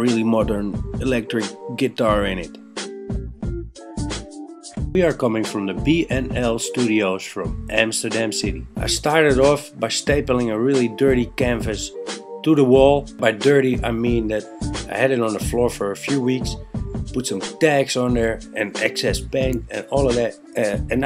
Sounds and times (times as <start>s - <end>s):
Speech: 0.0s - 2.6s, 5.0s - 16.6s, 17.2s - 21.0s
Music: 0.0s - 21.0s.